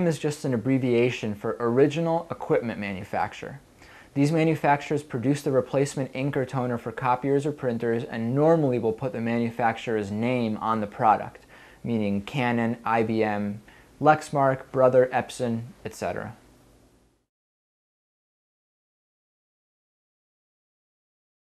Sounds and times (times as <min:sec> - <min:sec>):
Speech: 0:00.0 - 0:16.4.